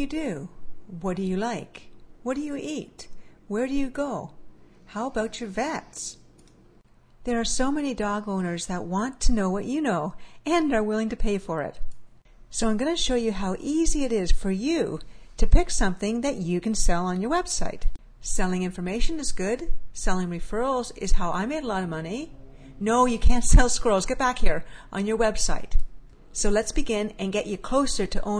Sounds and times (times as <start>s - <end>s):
Speech: 0.0s - 6.2s, 7.3s - 11.8s, 12.5s - 25.8s, 26.4s - 28.3s.